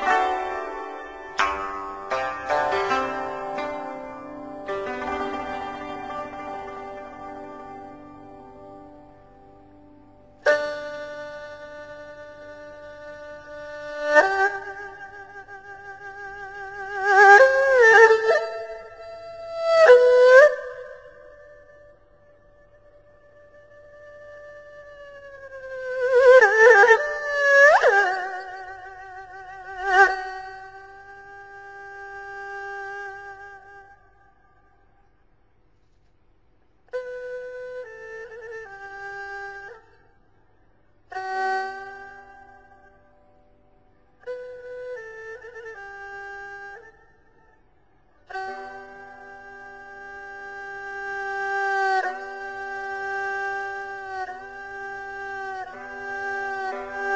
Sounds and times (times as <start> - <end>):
Music: 0.0 - 34.0, 48.3 - 57.1.